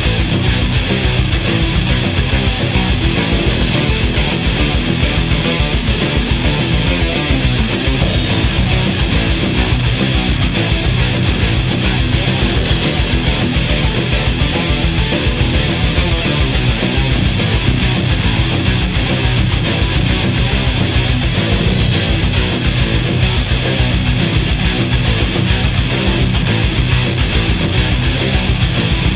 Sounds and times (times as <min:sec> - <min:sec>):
Soundtrack music: 0:00.0 - 0:29.1.